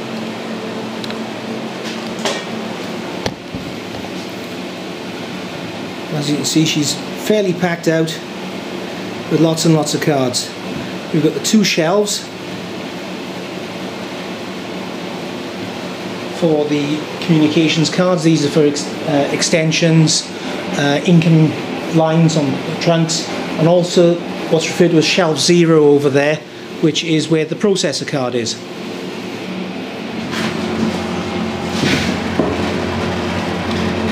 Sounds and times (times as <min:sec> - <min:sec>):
Speech: 0:06.1 - 0:08.3, 0:09.3 - 0:12.4, 0:16.4 - 0:28.6.